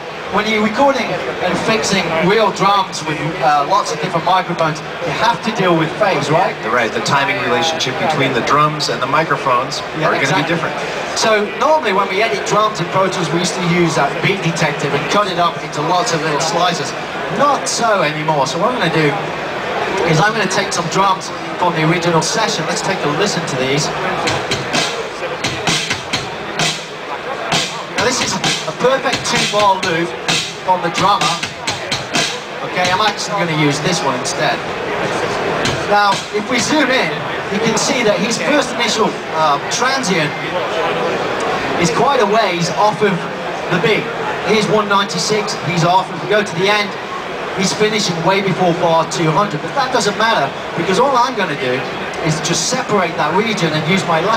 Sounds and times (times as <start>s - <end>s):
Speech: 0.0s - 54.3s
Music: 24.0s - 33.3s, 35.6s - 36.4s.